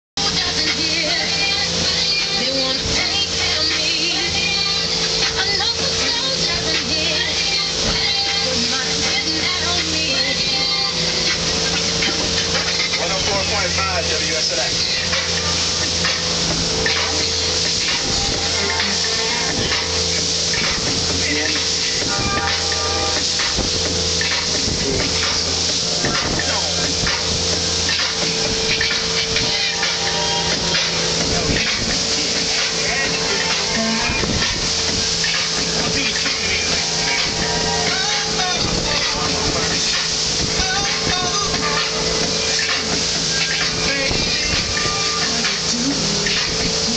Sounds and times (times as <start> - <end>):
Motorboat, speedboat: 0.2 - 46.9
Music: 0.2 - 46.9.